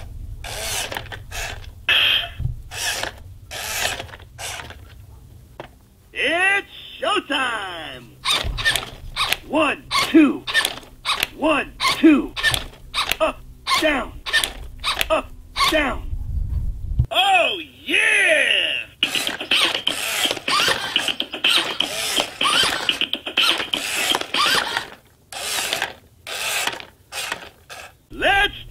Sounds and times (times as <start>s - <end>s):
Speech: 6.2s - 8.2s, 9.5s - 10.5s, 11.4s - 12.4s, 13.2s - 14.2s, 15.1s - 16.1s, 17.1s - 19.0s, 28.1s - 28.7s.